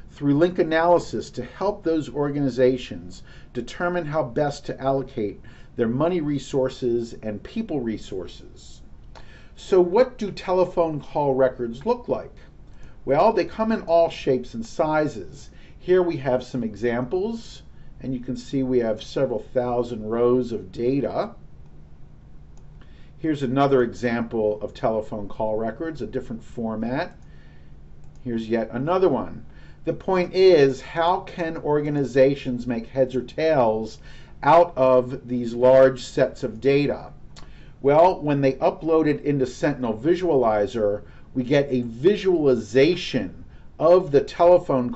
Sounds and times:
Speech: 0.0s - 8.8s, 9.6s - 12.4s, 13.1s - 21.4s, 23.2s - 27.2s, 28.2s - 37.2s, 37.8s - 44.9s.

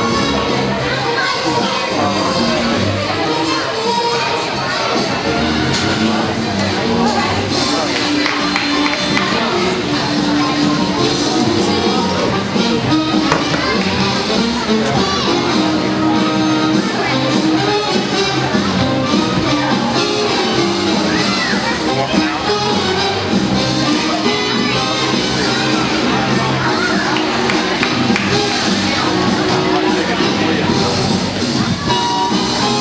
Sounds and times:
Inside, large room or hall: 0.0s - 32.8s
Music: 0.0s - 32.8s
Speech: 0.0s - 32.8s.

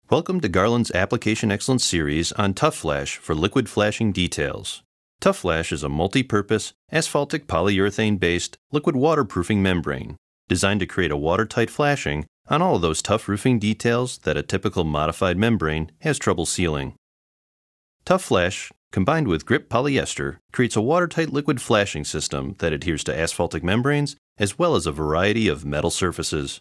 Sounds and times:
Speech: 0.1s - 17.0s, 18.0s - 26.6s.

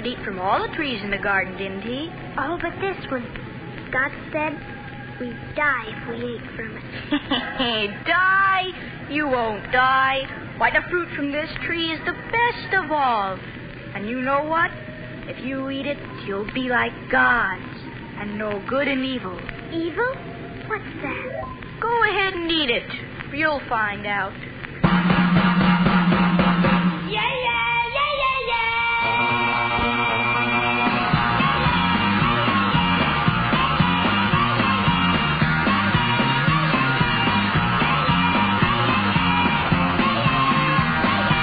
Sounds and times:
Music: 8.4s - 21.8s, 24.6s - 27.2s, 28.9s - 41.4s.

